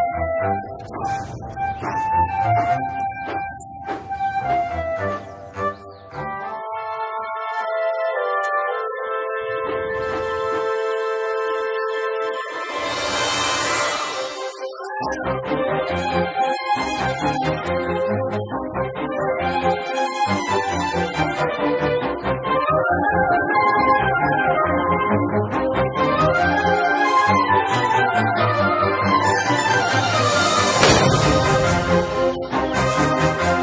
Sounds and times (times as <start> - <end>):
Music: 0.0 - 33.6.